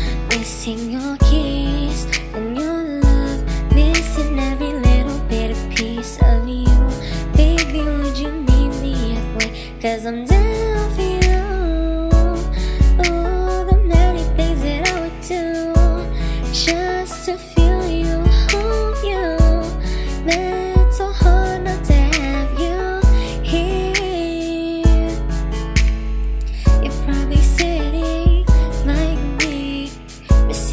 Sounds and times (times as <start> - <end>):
Music: 0.0 - 30.7.